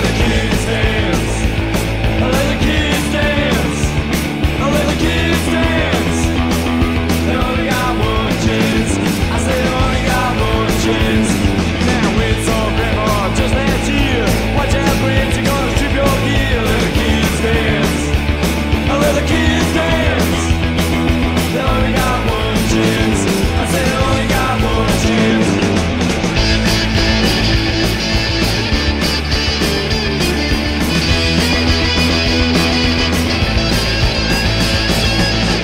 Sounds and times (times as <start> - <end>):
Music: 0.0 - 35.6.